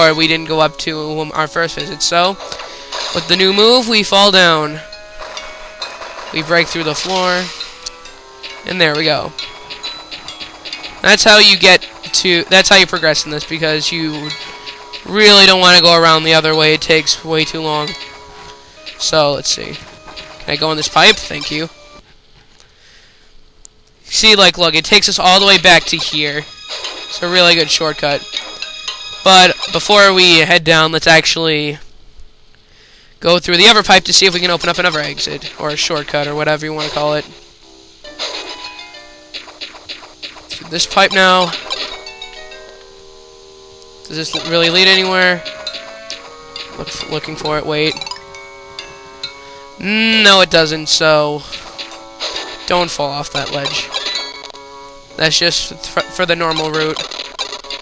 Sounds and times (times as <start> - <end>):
Speech: 0.0 - 2.4, 3.2 - 4.8, 6.4 - 7.5, 8.7 - 9.3, 11.0 - 14.3, 15.1 - 18.0, 19.0 - 19.8, 20.5 - 21.7, 24.1 - 26.5, 27.2 - 28.2, 29.3 - 31.8, 33.2 - 37.4, 40.5 - 41.6, 44.1 - 45.4, 46.8 - 48.0, 49.8 - 51.5, 52.7 - 53.9, 55.2 - 57.0.